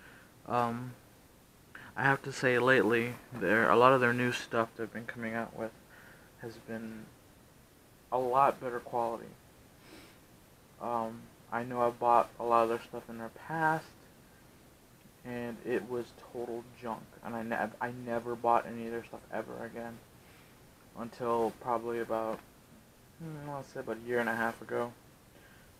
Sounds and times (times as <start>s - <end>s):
Speech: 0.5s - 1.0s, 1.9s - 5.7s, 6.4s - 7.1s, 8.1s - 9.4s, 10.8s - 14.0s, 15.2s - 20.0s, 21.0s - 22.4s, 23.2s - 25.0s.